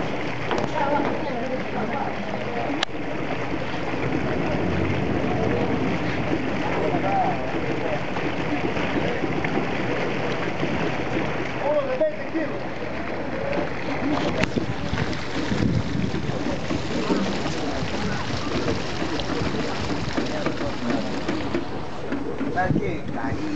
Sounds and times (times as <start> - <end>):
Boat, Water vehicle: 0.0 - 23.5.